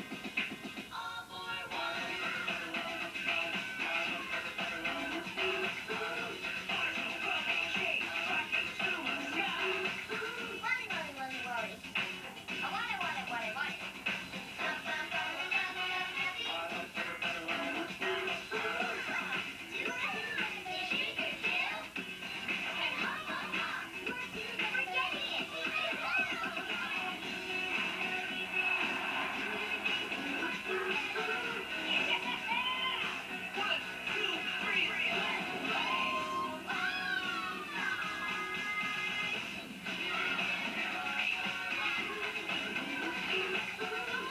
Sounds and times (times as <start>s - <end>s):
Music: 0.0s - 44.3s
Speech: 10.4s - 11.8s, 12.6s - 13.8s, 22.8s - 27.0s, 32.0s - 34.9s.